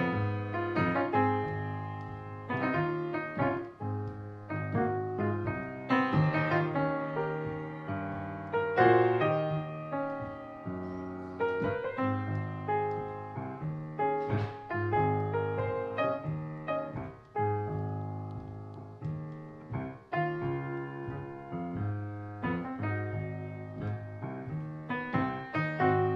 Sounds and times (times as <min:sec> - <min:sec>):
Music: 0:00.0 - 0:26.1.